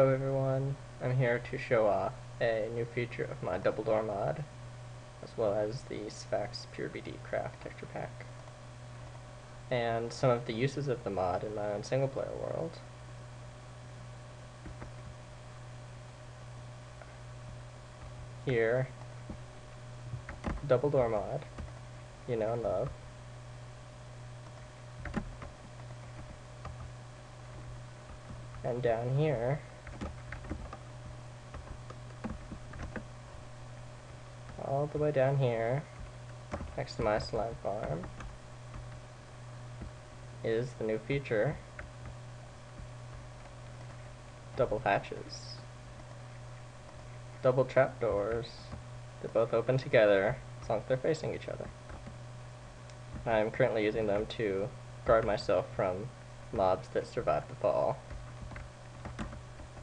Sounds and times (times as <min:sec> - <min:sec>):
Speech: 0:00.0 - 0:04.5, 0:05.2 - 0:08.3, 0:09.7 - 0:12.9, 0:18.5 - 0:19.0, 0:20.6 - 0:21.5, 0:22.3 - 0:23.0, 0:28.6 - 0:29.7, 0:34.6 - 0:35.9, 0:36.8 - 0:38.1, 0:40.4 - 0:41.6, 0:44.6 - 0:45.7, 0:47.4 - 0:51.7, 0:53.2 - 0:58.0.